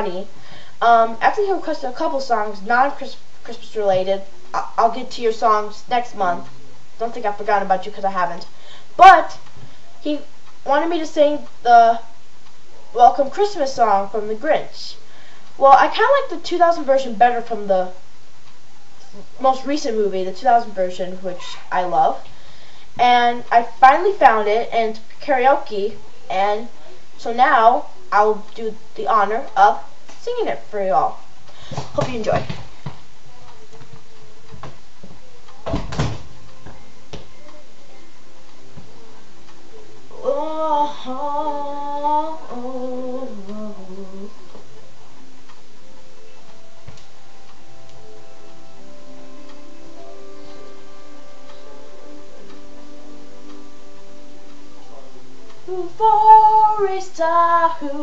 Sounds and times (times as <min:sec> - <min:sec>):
Speech: 0:00.0 - 0:09.4, 0:10.0 - 0:12.1, 0:12.9 - 0:15.0, 0:15.6 - 0:18.0, 0:19.0 - 0:22.3, 0:23.0 - 0:31.2, 0:31.9 - 0:32.6.